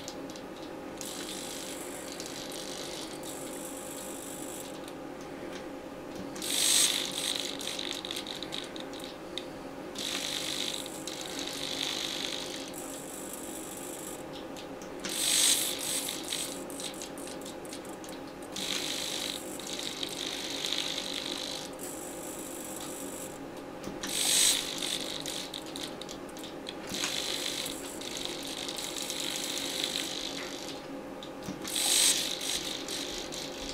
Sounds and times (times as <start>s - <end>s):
Gears: 0.0s - 4.9s, 6.4s - 9.2s, 10.0s - 14.2s, 15.0s - 23.4s, 24.0s - 30.8s, 31.5s - 33.7s
Ratchet, pawl: 1.0s - 4.7s, 6.4s - 9.2s, 10.0s - 14.2s, 15.1s - 17.4s, 18.6s - 23.4s, 24.0s - 30.8s, 31.6s - 33.7s
Pulleys: 6.4s - 8.8s, 10.0s - 12.7s, 15.1s - 17.0s, 18.6s - 23.4s, 24.0s - 25.9s, 26.9s - 30.8s, 31.6s - 33.7s.